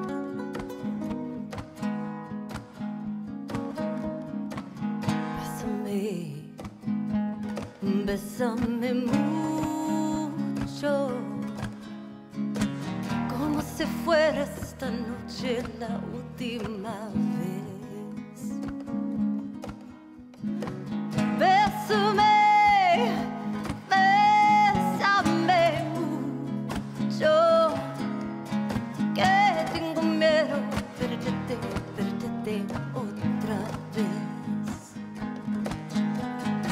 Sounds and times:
Flamenco: 0:00.0 - 0:36.7.

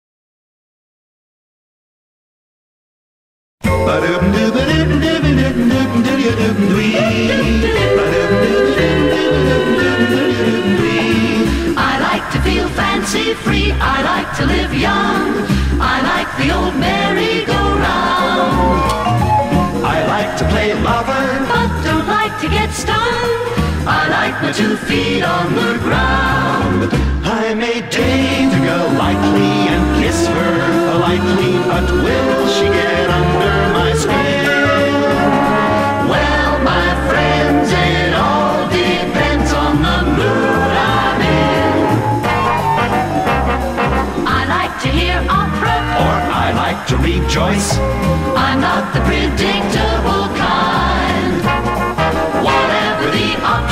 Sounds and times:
Music: 0:03.6 - 0:53.7.

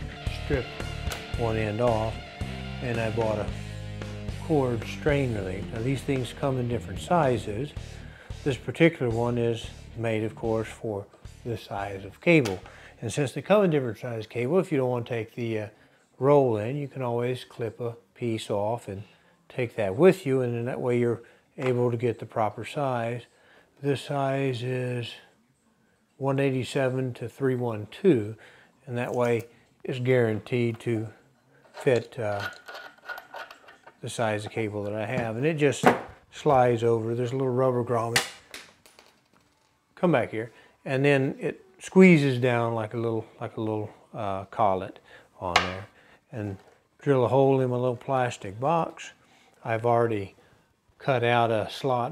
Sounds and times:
Inside, small room: 0:00.0 - 0:52.1
Speech: 0:00.3 - 0:00.7, 0:01.4 - 0:02.2, 0:02.8 - 0:03.6, 0:04.4 - 0:07.8, 0:08.4 - 0:25.4, 0:26.2 - 0:31.2, 0:31.8 - 0:32.6, 0:34.0 - 0:38.2, 0:40.0 - 0:50.4, 0:51.0 - 0:52.1.

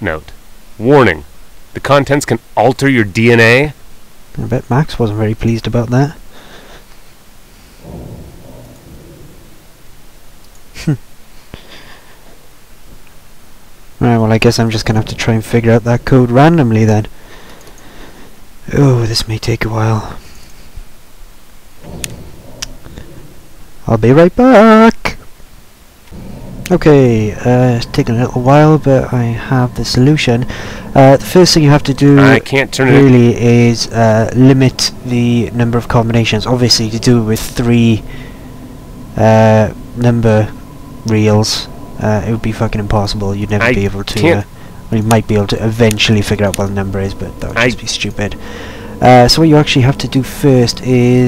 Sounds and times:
Speech: 0:00.0 - 0:03.8, 0:04.4 - 0:06.2, 0:14.0 - 0:17.1, 0:18.7 - 0:20.2, 0:23.8 - 0:25.2, 0:26.7 - 0:38.0, 0:39.2 - 0:48.4, 0:49.0 - 0:51.2.

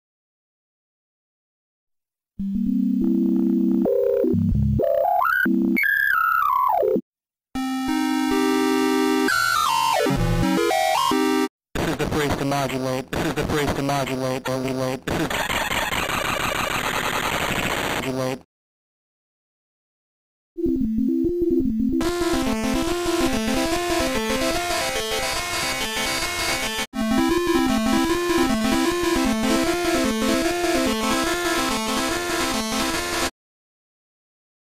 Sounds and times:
Synthesizer: 0:07.6 - 0:11.5, 0:20.6 - 0:33.3.

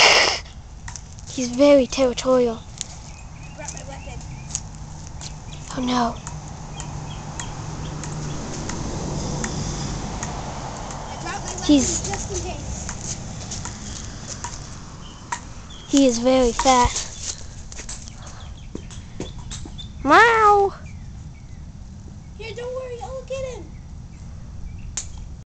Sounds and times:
Speech: 0:03.6 - 0:04.2, 0:11.2 - 0:12.6, 0:22.4 - 0:23.7.

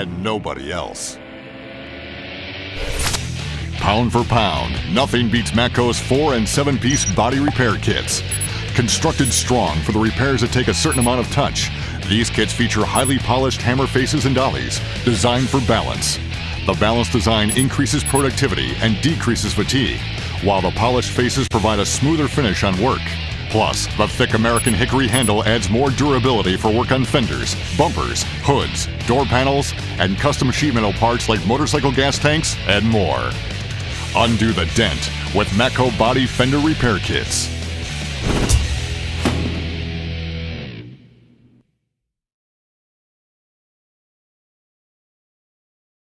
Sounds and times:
Speech: 0:00.0 - 0:01.2, 0:03.7 - 0:37.5
Music: 0:00.0 - 0:41.8.

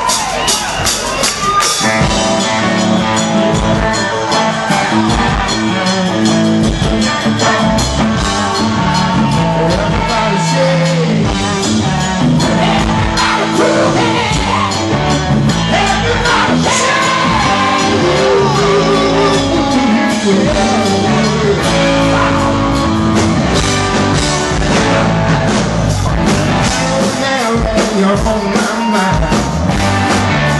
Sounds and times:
Music: 0:00.0 - 0:30.5
Male singing: 0:08.2 - 0:14.8, 0:15.7 - 0:22.6, 0:26.8 - 0:29.5.

